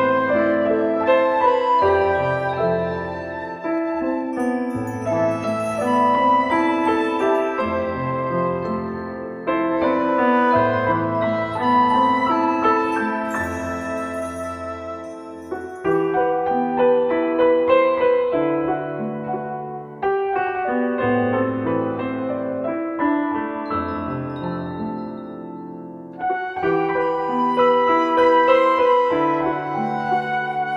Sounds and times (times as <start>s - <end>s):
Music: 0.0s - 30.7s.